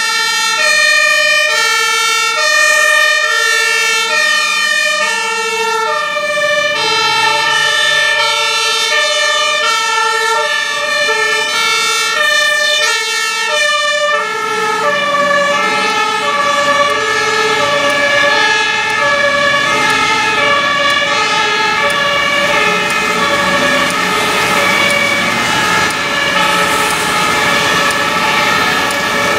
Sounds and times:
Fire engine, fire truck (siren): 0.0 - 29.3.

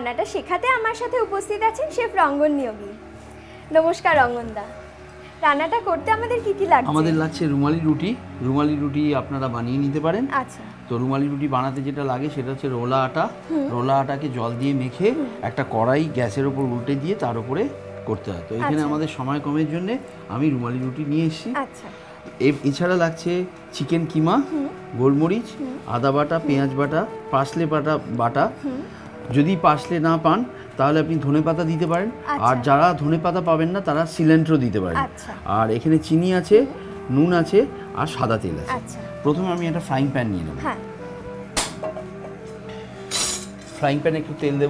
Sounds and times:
Music: 0.0 - 44.6.

